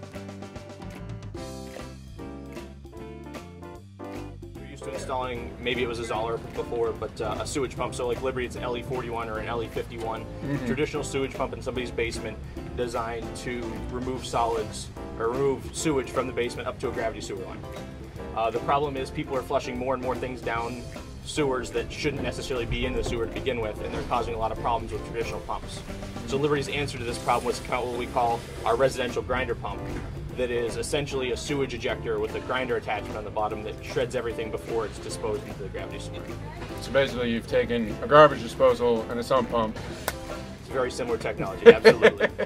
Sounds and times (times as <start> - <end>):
Music: 0.0 - 42.4
Speech: 4.6 - 17.6, 18.4 - 39.8, 40.7 - 42.2.